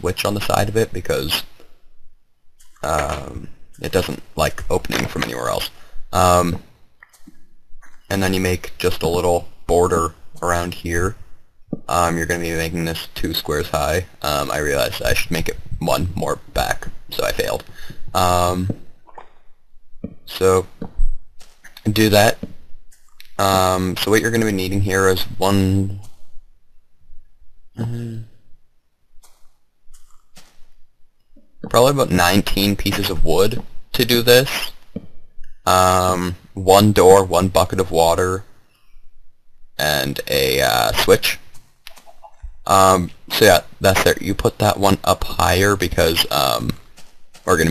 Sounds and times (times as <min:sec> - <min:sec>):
Speech: 0:00.0 - 0:01.6, 0:02.8 - 0:06.6, 0:08.1 - 0:11.2, 0:11.9 - 0:18.8, 0:20.3 - 0:20.8, 0:21.8 - 0:22.4, 0:23.2 - 0:26.1, 0:27.8 - 0:28.3, 0:31.7 - 0:34.8, 0:35.7 - 0:38.5, 0:39.8 - 0:41.4, 0:42.7 - 0:46.8, 0:47.5 - 0:47.7.